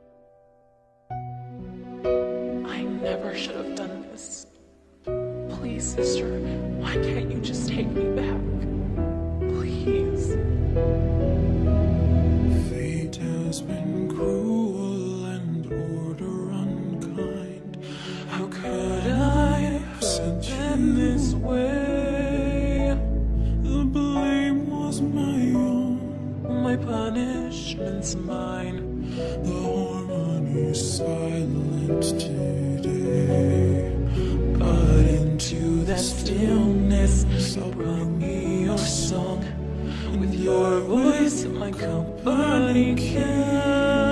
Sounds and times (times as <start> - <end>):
Lullaby: 1.2 - 4.5, 5.1 - 44.1.